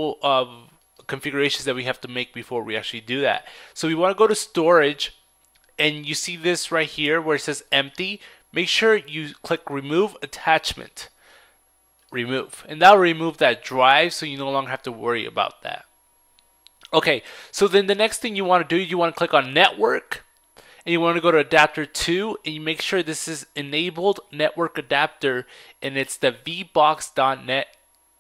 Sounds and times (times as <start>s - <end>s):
Speech: 0.0s - 5.1s, 5.8s - 11.1s, 12.2s - 15.9s, 16.8s - 20.2s, 20.8s - 27.8s.